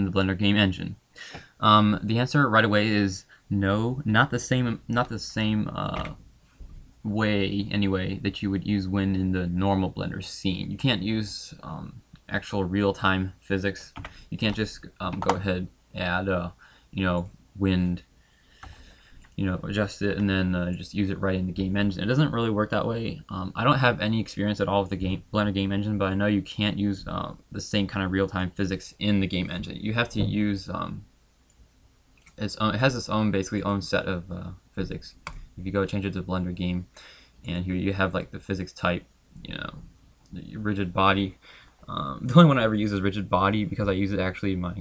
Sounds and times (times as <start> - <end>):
Speech: 0.0 - 1.0, 1.6 - 6.2, 7.0 - 18.1, 19.4 - 31.1, 32.3 - 44.8.